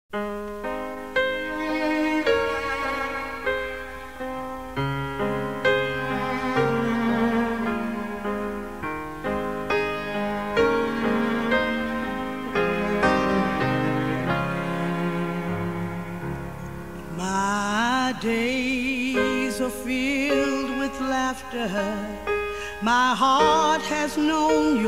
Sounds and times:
Cello: 0:00.5 - 0:18.4.

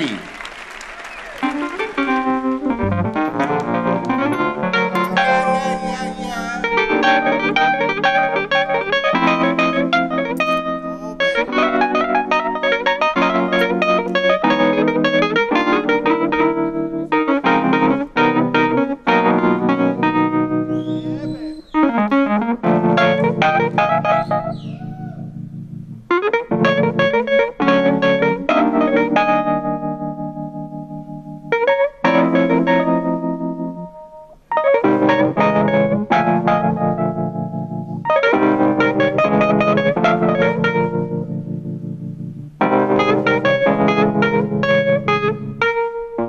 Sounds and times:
Music: 0:00.0 - 0:46.2.

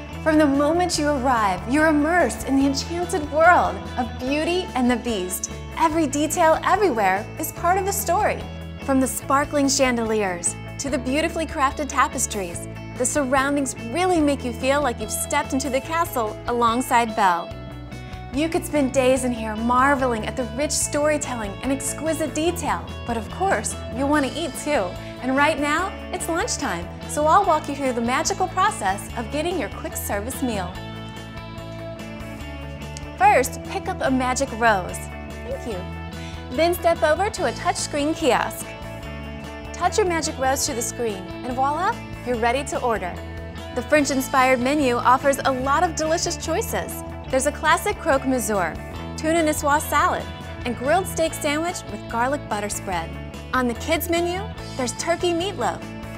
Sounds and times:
Music: 0:00.0 - 0:56.1
Speech: 0:00.3 - 0:17.4, 0:18.4 - 0:30.8, 0:33.2 - 0:35.9, 0:36.5 - 0:38.6, 0:39.8 - 0:43.2, 0:43.8 - 0:55.8.

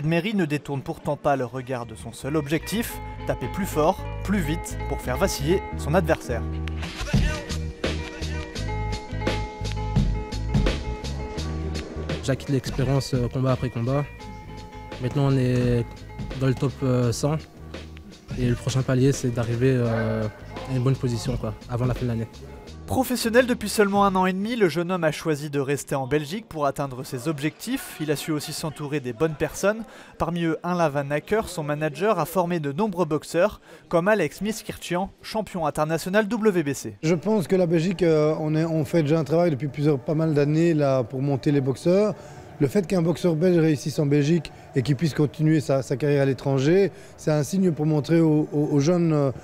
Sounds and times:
Speech: 0:00.0 - 0:06.4, 0:12.2 - 0:14.1, 0:15.0 - 0:17.4, 0:18.3 - 0:49.4.

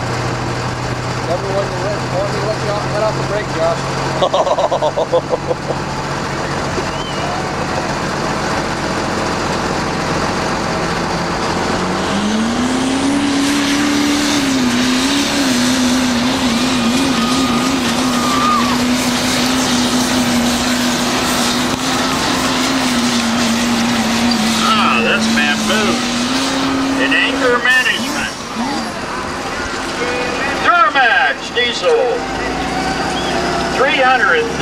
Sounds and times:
Speech: 0:01.3 - 0:03.8, 0:24.6 - 0:26.0, 0:27.0 - 0:28.8, 0:29.9 - 0:32.6, 0:33.7 - 0:34.6.

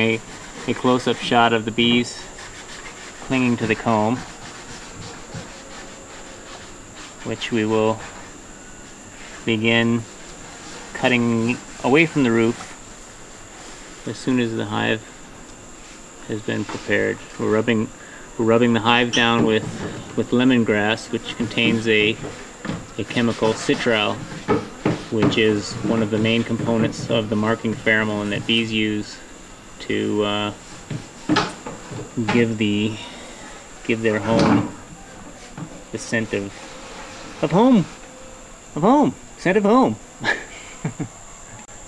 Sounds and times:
Speech: 0:00.0 - 0:02.3, 0:03.3 - 0:04.2, 0:07.2 - 0:08.1, 0:09.4 - 0:10.1, 0:11.0 - 0:12.6, 0:14.1 - 0:15.1, 0:16.2 - 0:22.3, 0:23.0 - 0:24.2, 0:25.1 - 0:29.2, 0:29.8 - 0:30.6, 0:32.2 - 0:33.1, 0:33.8 - 0:35.3, 0:35.9 - 0:36.6, 0:37.4 - 0:38.0, 0:38.8 - 0:40.0
Bee, wasp, etc.: 0:00.0 - 0:41.8.

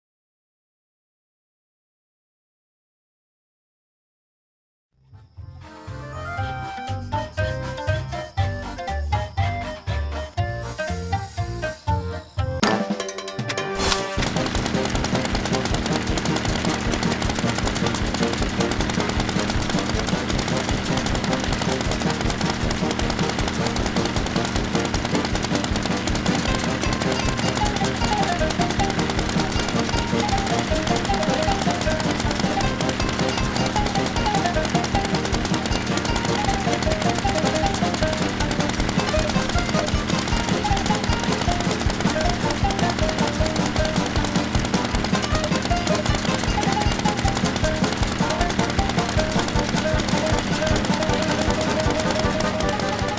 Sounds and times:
Music: 0:05.0 - 0:53.1.

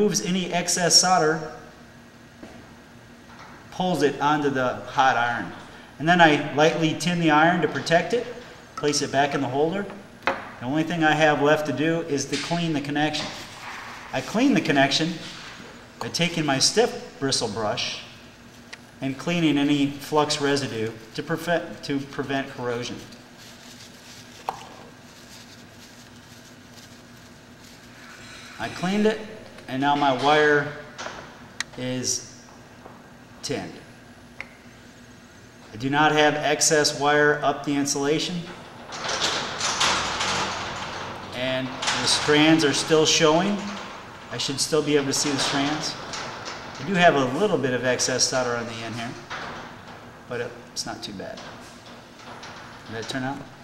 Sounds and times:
Speech: 0:00.0 - 0:01.6, 0:03.7 - 0:10.0, 0:10.6 - 0:13.4, 0:14.1 - 0:15.3, 0:16.0 - 0:18.1, 0:19.0 - 0:23.1, 0:28.6 - 0:30.8, 0:31.7 - 0:32.3, 0:33.4 - 0:33.9, 0:35.7 - 0:38.5, 0:41.4 - 0:46.0, 0:46.8 - 0:49.3, 0:50.3 - 0:51.5, 0:52.9 - 0:53.5.

